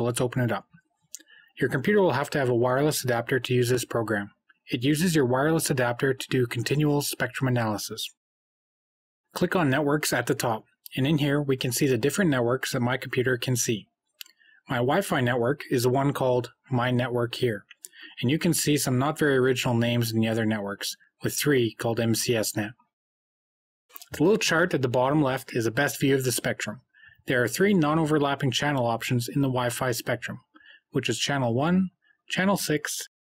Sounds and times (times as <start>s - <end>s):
Speech: 0.0s - 0.6s, 1.2s - 8.2s, 9.4s - 13.9s, 14.6s - 22.9s, 23.9s - 33.2s.